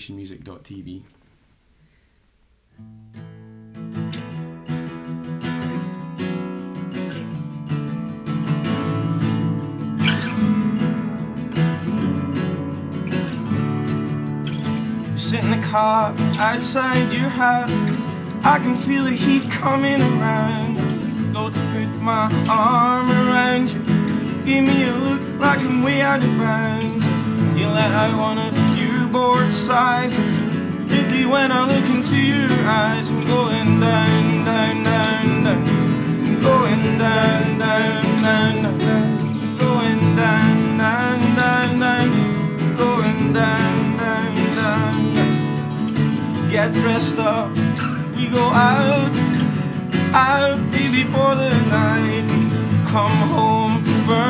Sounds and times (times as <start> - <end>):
Soul music: 3.2 - 54.2.